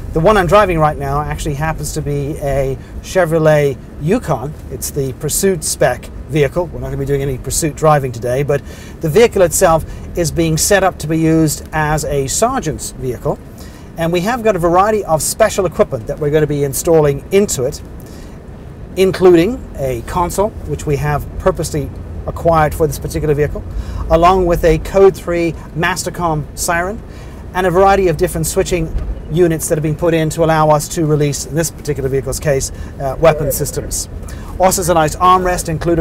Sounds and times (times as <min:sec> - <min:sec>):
Speech: 0:00.2 - 0:13.4, 0:14.0 - 0:17.8, 0:19.0 - 0:27.0, 0:27.6 - 0:36.0.